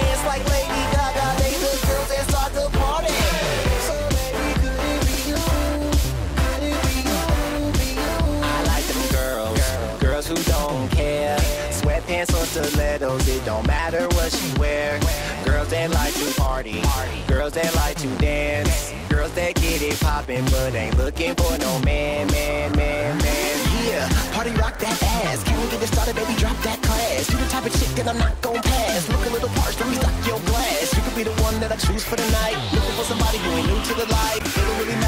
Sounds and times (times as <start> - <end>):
Funk: 0.0 - 35.0.